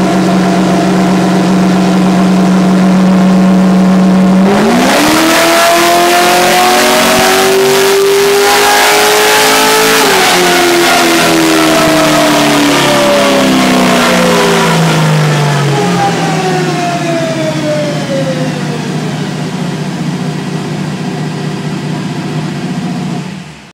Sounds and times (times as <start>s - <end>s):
Car: 0.0s - 23.7s.